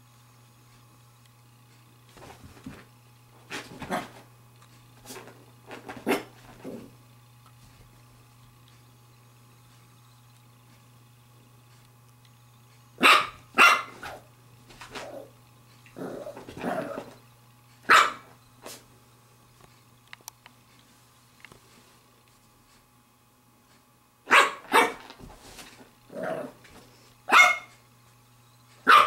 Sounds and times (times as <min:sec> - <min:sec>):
Bark: 0:13.0 - 0:14.3, 0:17.9 - 0:18.3, 0:24.3 - 0:25.0, 0:27.3 - 0:27.8.